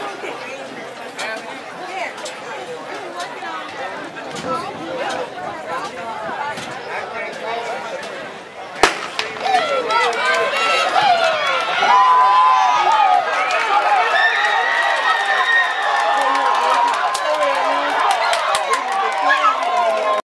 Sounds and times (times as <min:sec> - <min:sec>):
Speech: 0:00.0 - 0:15.4, 0:16.0 - 0:20.2
Outside, urban or manmade: 0:00.0 - 0:20.2
Run: 0:09.2 - 0:20.2.